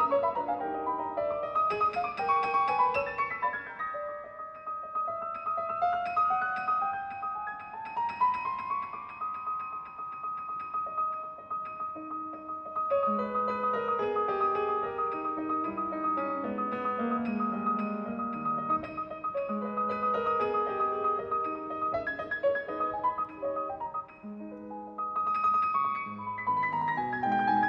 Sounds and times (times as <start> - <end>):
Classical music: 0.0 - 27.6
Piano: 0.0 - 27.6.